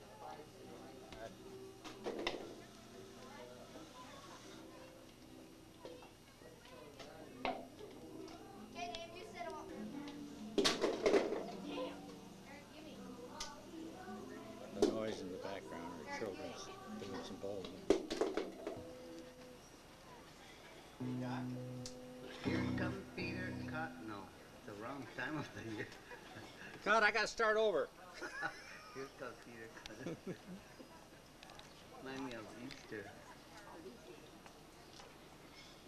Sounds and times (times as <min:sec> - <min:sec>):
Music: 0:00.0 - 0:25.6.